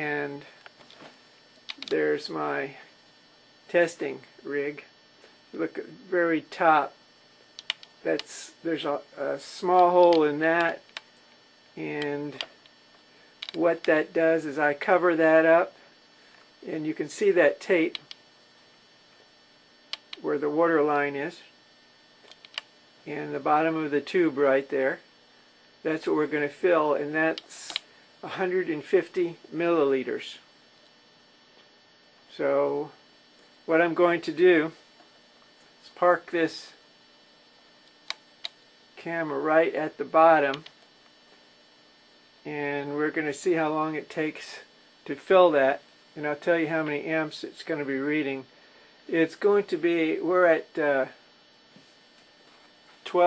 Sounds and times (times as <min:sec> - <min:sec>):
Speech: 0:00.0 - 0:00.6, 0:01.8 - 0:02.9, 0:03.7 - 0:04.9, 0:05.5 - 0:07.0, 0:08.0 - 0:10.8, 0:11.8 - 0:12.5, 0:13.6 - 0:15.8, 0:16.6 - 0:18.0, 0:20.2 - 0:21.5, 0:23.0 - 0:25.0, 0:25.8 - 0:30.5, 0:32.3 - 0:33.0, 0:33.7 - 0:34.8, 0:35.8 - 0:36.8, 0:39.0 - 0:40.7, 0:42.4 - 0:48.5, 0:49.1 - 0:51.2, 0:53.0 - 0:53.2.